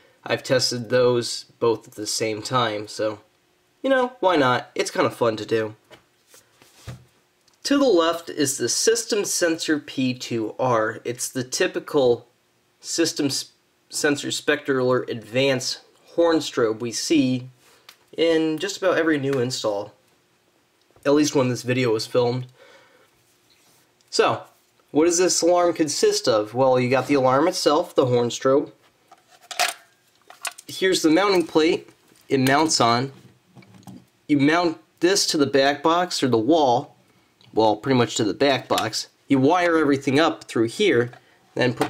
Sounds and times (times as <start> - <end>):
Speech: 0.2 - 5.8, 7.6 - 17.6, 18.2 - 20.0, 21.0 - 22.6, 24.1 - 28.8, 30.7 - 33.2, 34.3 - 36.9, 37.5 - 41.8.